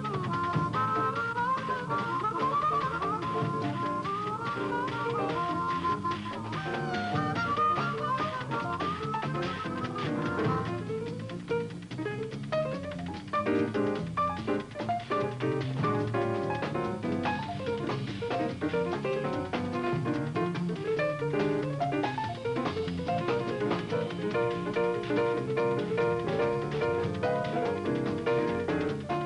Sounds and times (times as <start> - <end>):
Music: 0.0 - 29.2.